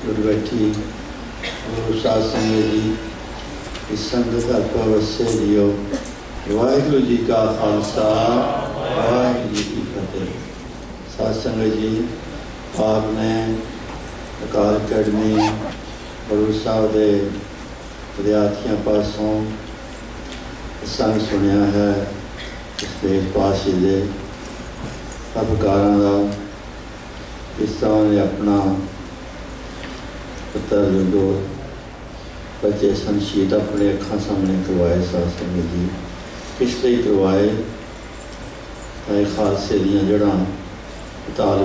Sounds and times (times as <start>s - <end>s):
Male speech, man speaking: 0.0s - 0.9s, 1.7s - 3.1s, 3.9s - 10.5s, 11.1s - 12.2s, 12.8s - 13.7s, 14.4s - 17.4s, 18.2s - 19.6s, 20.8s - 22.2s, 22.8s - 24.2s, 25.4s - 26.5s, 27.6s - 29.0s, 30.6s - 31.6s, 32.6s - 37.8s, 39.1s - 40.6s, 41.4s - 41.6s
Narration, monologue: 0.0s - 41.6s.